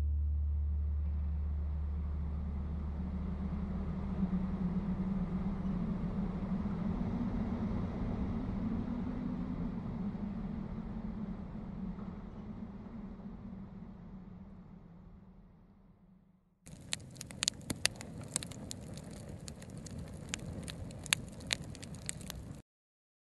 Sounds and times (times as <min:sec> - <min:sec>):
Outside, rural or natural: 0:00.0 - 0:22.6.